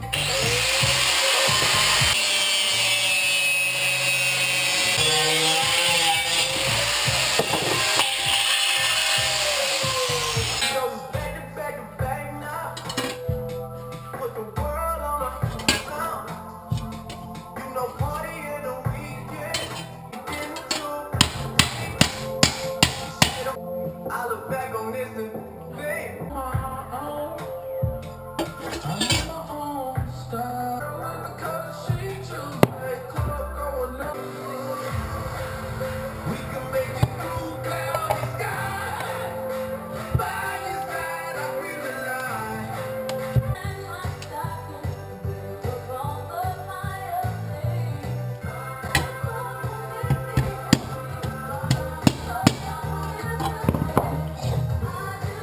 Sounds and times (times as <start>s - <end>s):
Music: 0.0s - 55.4s.